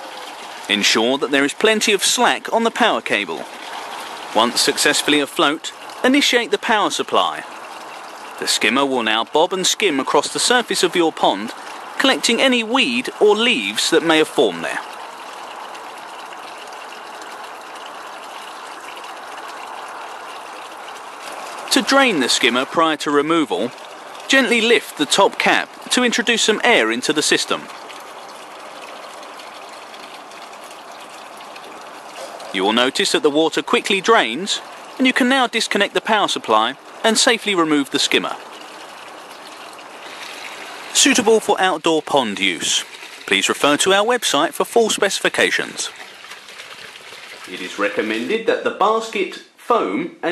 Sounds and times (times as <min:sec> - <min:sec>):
Outside, urban or manmade: 0:00.0 - 0:50.3
Speech: 0:00.7 - 0:03.5, 0:04.4 - 0:07.4, 0:08.4 - 0:14.8, 0:21.7 - 0:23.7, 0:24.3 - 0:27.7, 0:32.5 - 0:38.4, 0:41.0 - 0:45.9, 0:47.5 - 0:50.3.